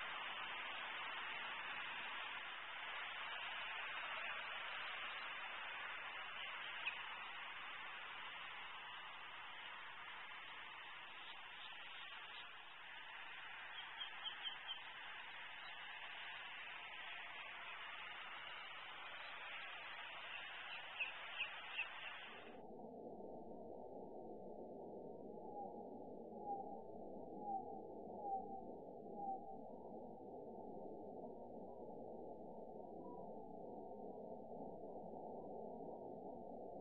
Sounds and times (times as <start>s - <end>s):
Outside, rural or natural: 0.0s - 36.8s
Bird: 3.4s - 7.7s, 11.0s - 12.8s, 13.6s - 15.9s, 17.6s - 22.5s.